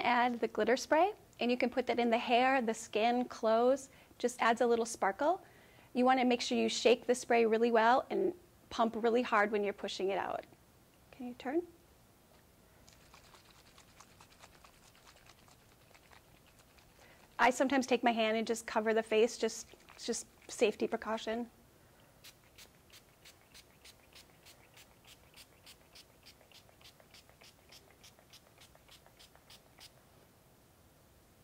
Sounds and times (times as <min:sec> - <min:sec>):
Speech: 0:00.0 - 0:05.4, 0:11.1 - 0:11.8, 0:17.4 - 0:21.5.